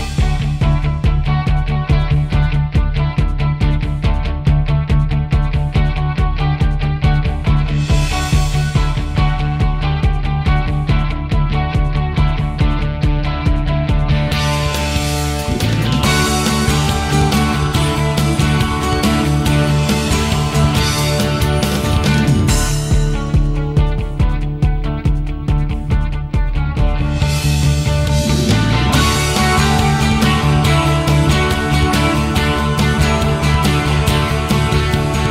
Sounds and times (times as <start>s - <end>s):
Music: 0.0s - 35.3s.